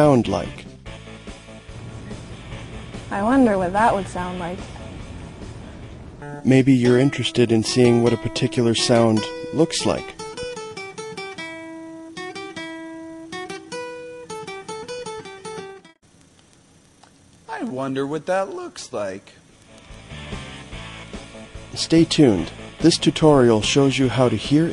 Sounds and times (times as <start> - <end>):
Speech: 0.0 - 0.6, 6.5 - 10.2, 17.5 - 19.4, 21.8 - 24.7
Music: 0.0 - 16.0, 19.6 - 24.7.